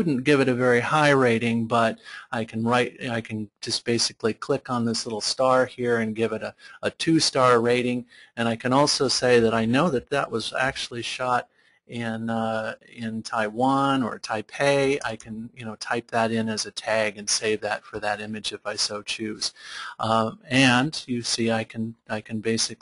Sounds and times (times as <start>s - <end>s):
Speech: 0.0s - 22.8s.